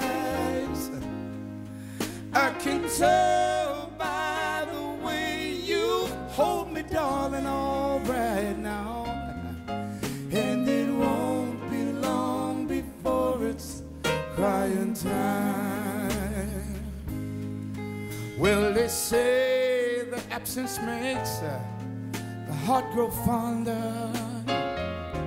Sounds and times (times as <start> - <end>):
Music: 0.0 - 25.2.